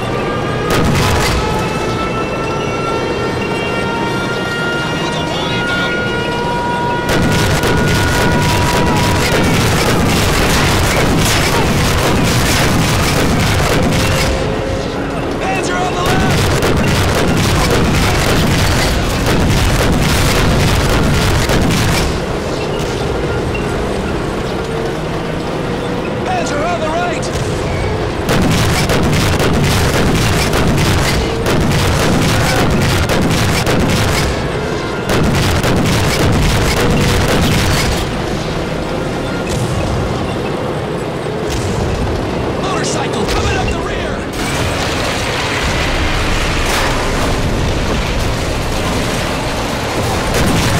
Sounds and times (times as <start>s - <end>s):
Speech: 15.4s - 16.4s, 26.2s - 27.4s, 42.6s - 44.3s.